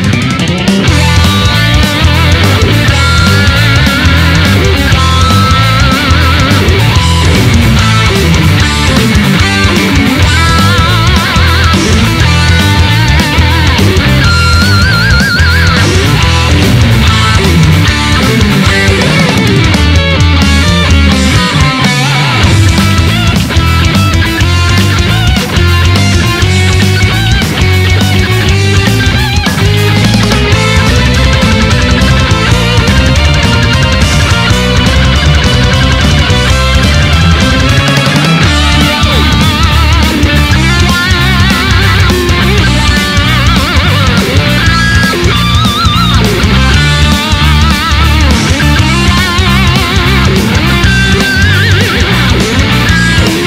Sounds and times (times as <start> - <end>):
Electric guitar: 0.0 - 53.4
Strum: 0.0 - 53.4.